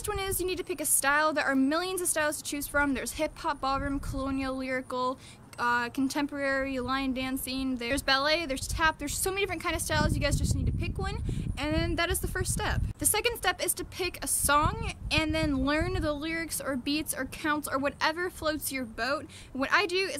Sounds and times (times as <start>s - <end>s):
Speech: 0.0s - 20.1s.